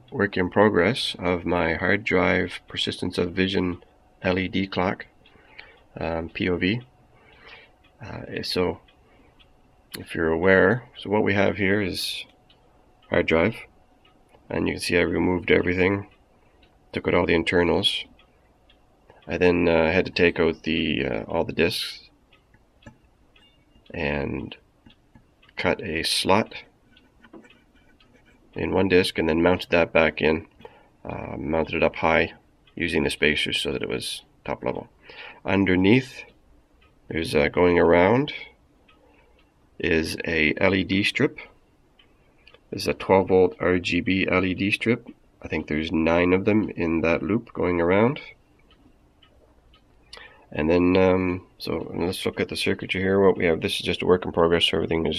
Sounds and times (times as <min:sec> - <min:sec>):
Speech: 0:00.1 - 0:05.2, 0:06.0 - 0:06.9, 0:08.0 - 0:08.9, 0:10.0 - 0:12.4, 0:13.1 - 0:13.7, 0:14.5 - 0:16.1, 0:16.9 - 0:18.2, 0:19.2 - 0:22.1, 0:23.9 - 0:24.6, 0:25.5 - 0:26.7, 0:28.6 - 0:36.4, 0:37.1 - 0:38.6, 0:39.8 - 0:41.6, 0:42.7 - 0:48.4, 0:50.5 - 0:55.1.